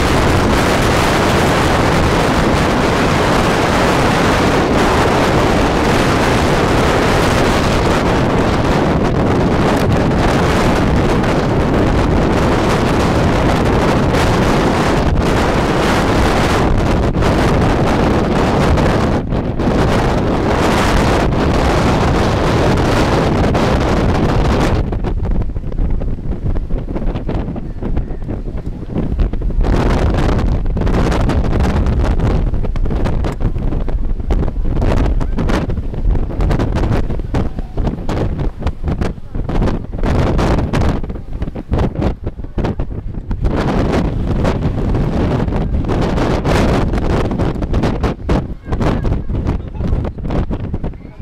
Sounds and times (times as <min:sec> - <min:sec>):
Wind noise (microphone): 0:00.0 - 0:51.2.